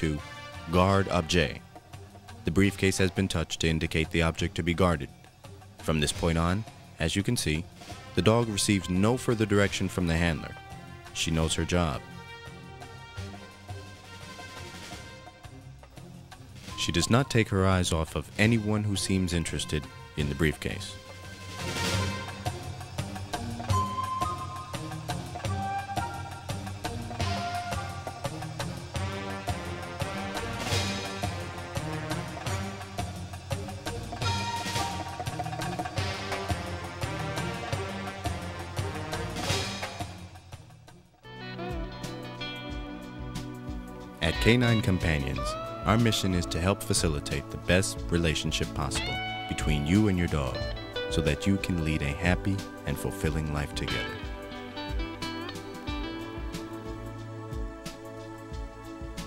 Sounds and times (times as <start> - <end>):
Speech: 0.0 - 1.6, 2.5 - 5.2, 5.8 - 10.6, 11.2 - 12.0, 16.7 - 21.0, 44.2 - 54.2
Music: 0.0 - 59.2.